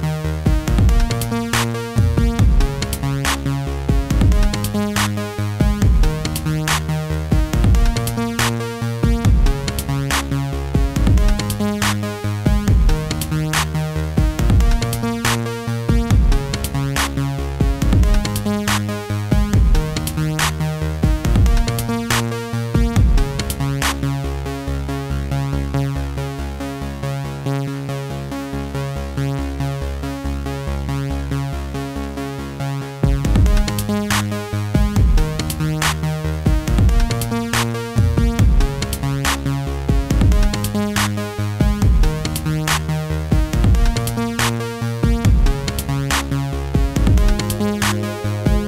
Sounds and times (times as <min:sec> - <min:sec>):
Music: 0:00.0 - 0:48.6.